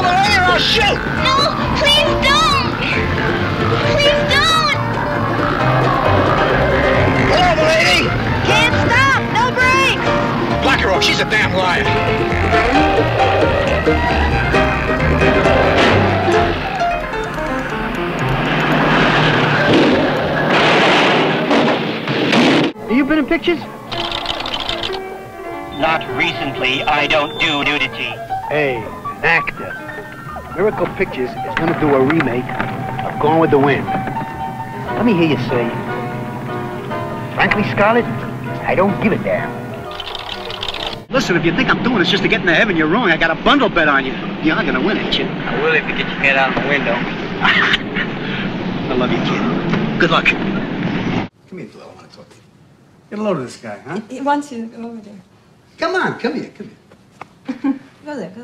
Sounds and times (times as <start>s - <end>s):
Music: 0.0s - 21.6s, 22.8s - 50.8s.